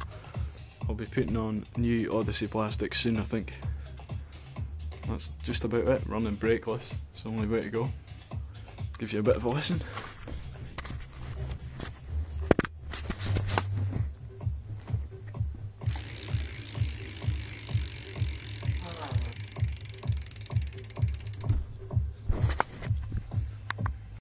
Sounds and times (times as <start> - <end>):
Music: 0.0 - 24.2
Bicycle: 15.8 - 23.1.